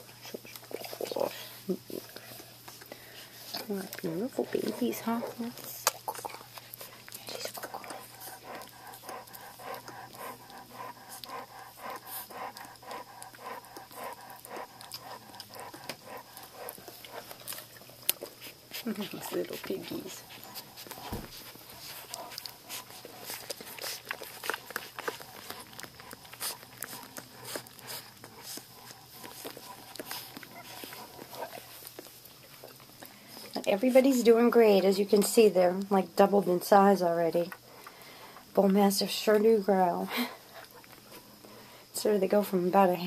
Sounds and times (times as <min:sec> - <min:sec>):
Dog: 0:03.5 - 0:33.6
Speech: 0:03.6 - 0:06.3, 0:18.8 - 0:20.3, 0:33.6 - 0:37.6, 0:38.6 - 0:40.2, 0:42.0 - 0:43.0.